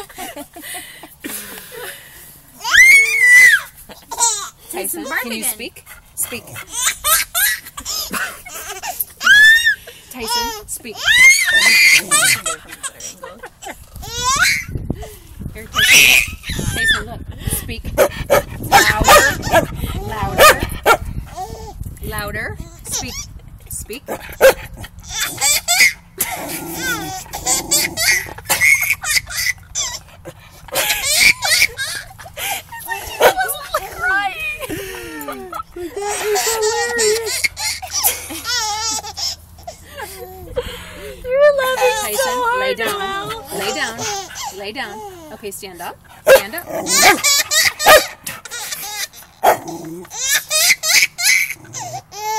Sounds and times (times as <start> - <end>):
Dog: 18.0 - 19.7, 20.4 - 21.1, 24.1 - 24.7, 46.3 - 48.4
Canidae, dogs, wolves: 18.0 - 21.1, 24.1 - 25.6, 46.2 - 48.5.